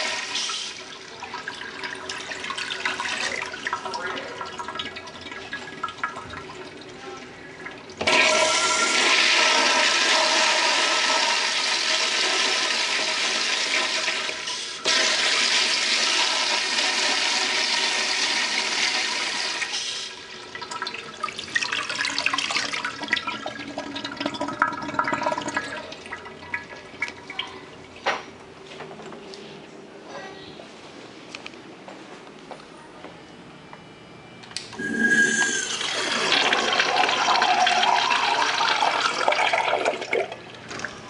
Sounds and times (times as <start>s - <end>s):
Toilet flush: 0.0s - 28.0s, 34.8s - 41.0s
Water: 20.5s - 28.1s.